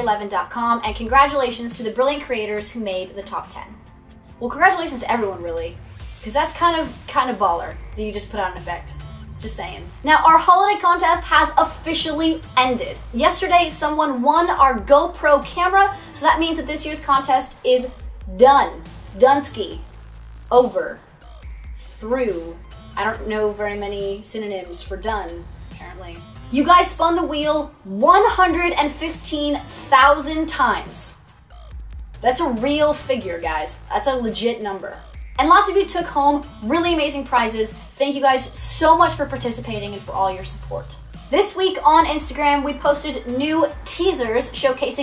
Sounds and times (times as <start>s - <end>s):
Speech: 0.0s - 3.8s, 4.4s - 19.8s, 20.5s - 21.0s, 21.8s - 31.2s, 32.2s - 45.0s
Music: 0.0s - 45.0s.